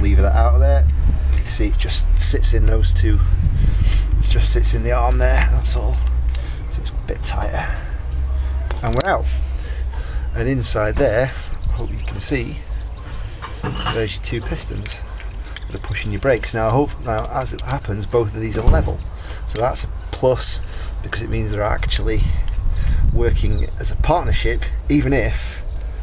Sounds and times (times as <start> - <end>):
Speech: 0.0 - 3.3, 4.2 - 6.0, 6.7 - 7.9, 8.7 - 9.4, 10.3 - 12.6, 13.8 - 15.0, 15.7 - 22.4, 23.1 - 25.6
Outside, urban or manmade: 0.0 - 26.0.